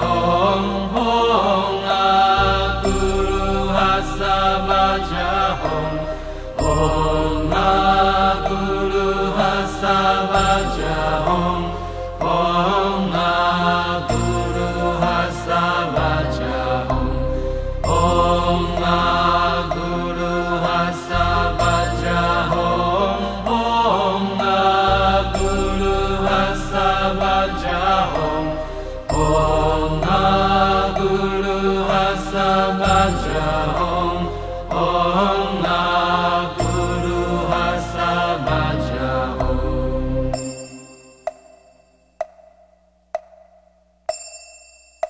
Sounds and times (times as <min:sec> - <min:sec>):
Mantra: 0:00.0 - 0:40.7.